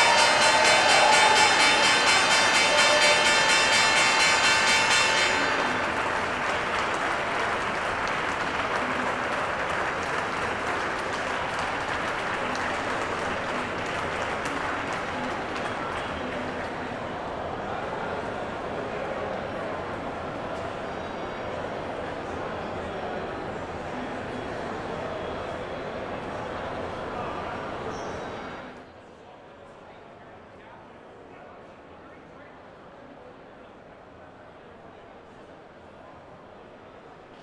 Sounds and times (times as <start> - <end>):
Speech: 5.6 - 37.4.